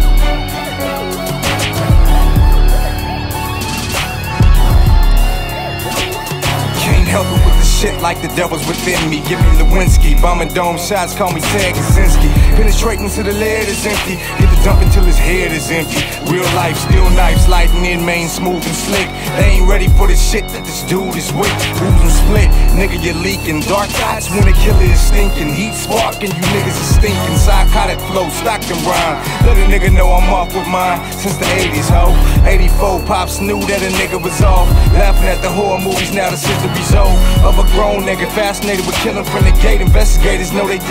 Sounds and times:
Music: 0:00.0 - 0:40.9.

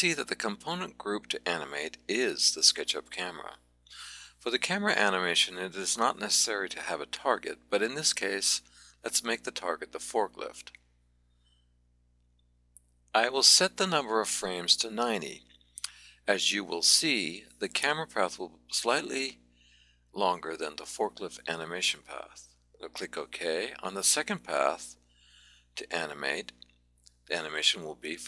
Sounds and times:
Speech: 0:00.0 - 0:10.8, 0:13.2 - 0:19.4, 0:20.2 - 0:25.0, 0:25.8 - 0:26.6, 0:27.3 - 0:28.2.

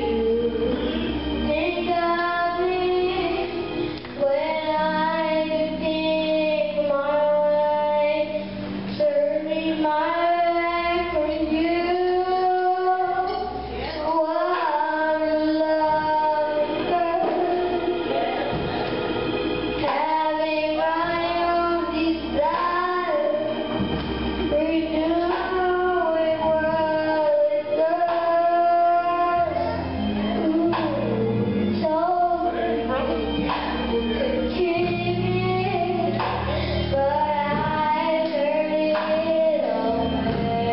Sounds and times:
Music: 0:00.0 - 0:40.7
Child singing: 0:01.5 - 0:03.6, 0:04.2 - 0:18.6, 0:19.8 - 0:23.6, 0:24.5 - 0:40.7.

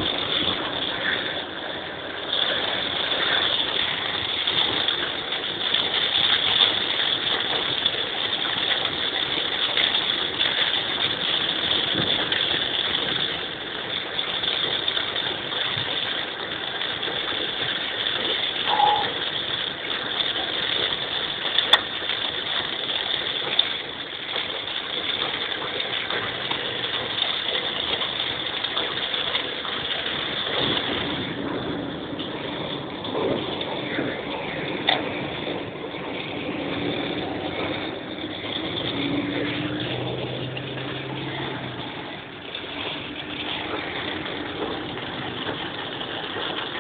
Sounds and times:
Rain on surface: 0:00.0 - 0:46.8.

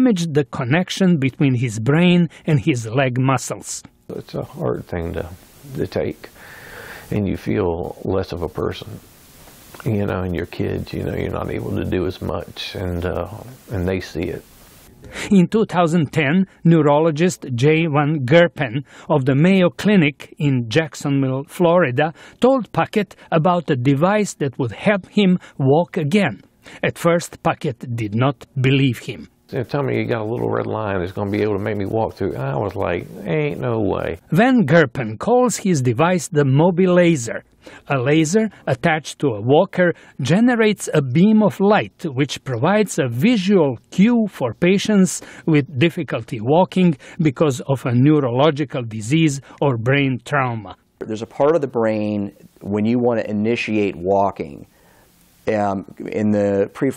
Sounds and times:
Speech: 0:00.0 - 0:06.4, 0:07.1 - 0:09.0, 0:09.8 - 0:14.4, 0:15.2 - 0:54.7, 0:55.4 - 0:56.9.

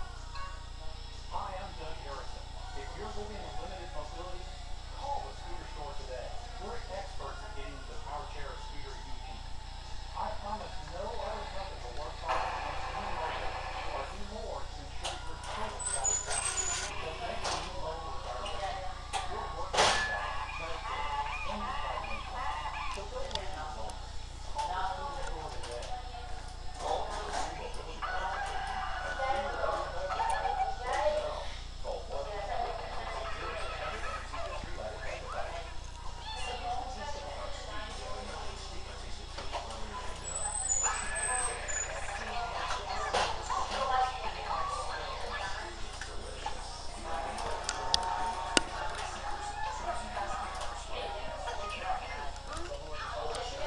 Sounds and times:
Animal: 0:20.0 - 0:23.2, 0:35.4 - 0:36.9, 0:40.2 - 0:43.9.

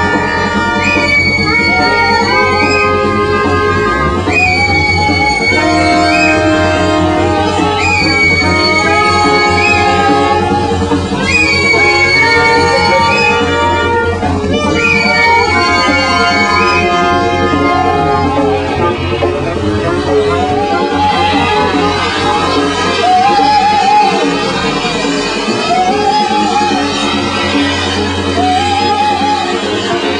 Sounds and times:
Music: 0:00.0 - 0:30.1.

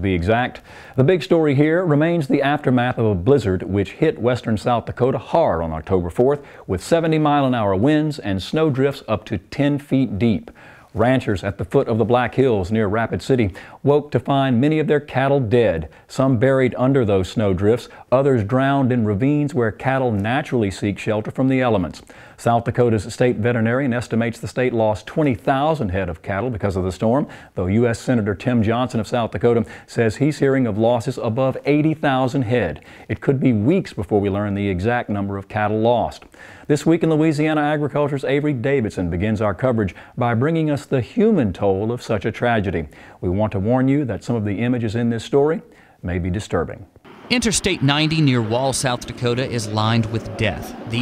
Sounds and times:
Speech: 0:00.0 - 0:51.0.

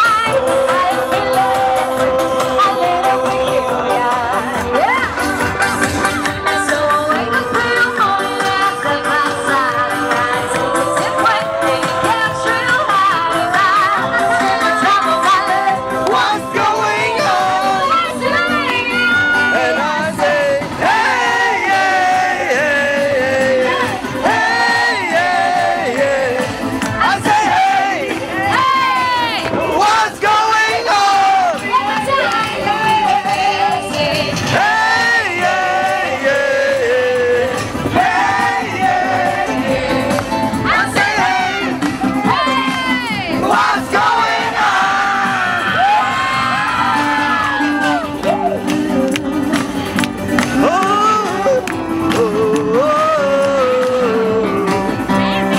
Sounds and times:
Music of Latin America: 0:00.0 - 0:55.5.

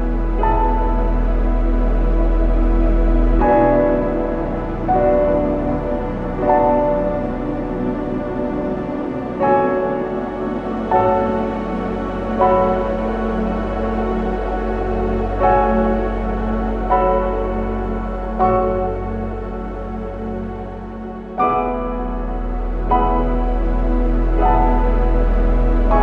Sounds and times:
Sad music: 0:00.0 - 0:26.0.

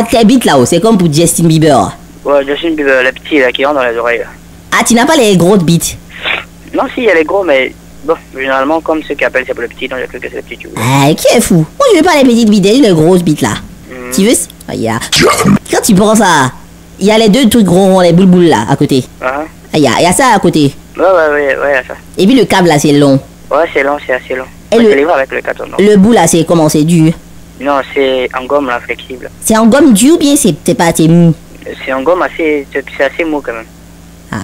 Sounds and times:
Speech: 0:00.0 - 0:33.7.

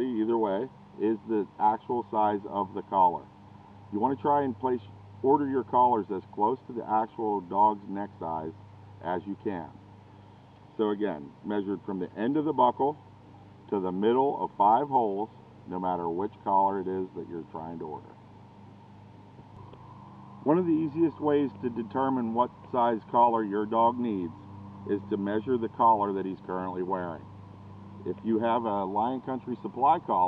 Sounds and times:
Speech: 0:00.0 - 0:03.3, 0:03.9 - 0:09.8, 0:10.8 - 0:13.0, 0:13.7 - 0:18.1, 0:20.5 - 0:24.3, 0:24.9 - 0:27.3, 0:28.1 - 0:30.2.

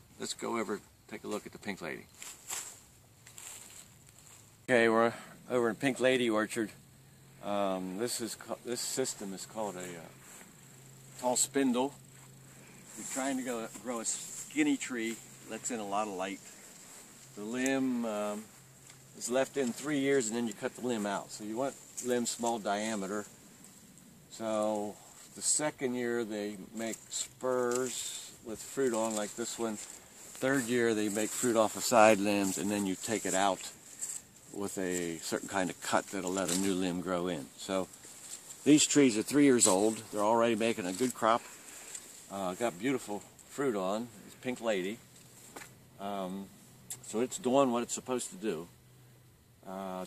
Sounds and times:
Speech: 0:00.2 - 0:02.1, 0:04.7 - 0:06.8, 0:07.4 - 0:10.2, 0:11.2 - 0:12.0, 0:12.9 - 0:16.5, 0:17.4 - 0:18.5, 0:19.1 - 0:23.3, 0:24.3 - 0:33.8, 0:34.5 - 0:37.9, 0:38.6 - 0:41.5, 0:42.3 - 0:45.0, 0:46.0 - 0:48.7, 0:49.6 - 0:50.0.

